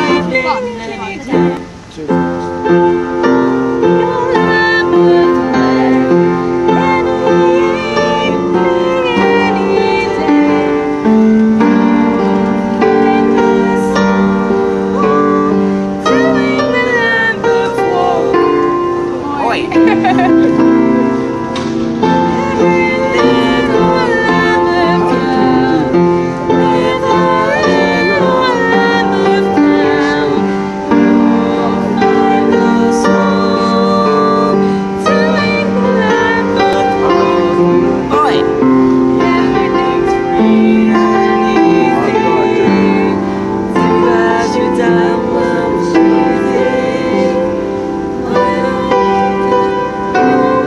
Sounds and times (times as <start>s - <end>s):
Female singing: 0.0s - 1.6s, 3.2s - 21.1s, 22.3s - 38.6s, 39.2s - 50.6s
Music: 0.0s - 50.6s
Male singing: 3.8s - 10.8s, 14.9s - 18.7s, 22.4s - 30.6s, 31.2s - 38.6s, 39.2s - 47.6s, 48.2s - 50.6s.